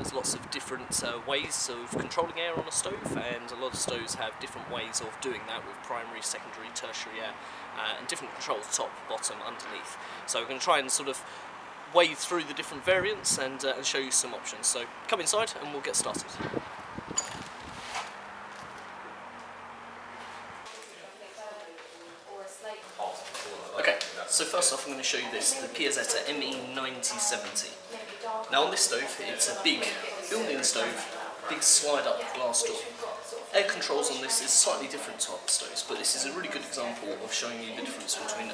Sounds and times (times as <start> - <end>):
Speech: 23.8 - 38.5.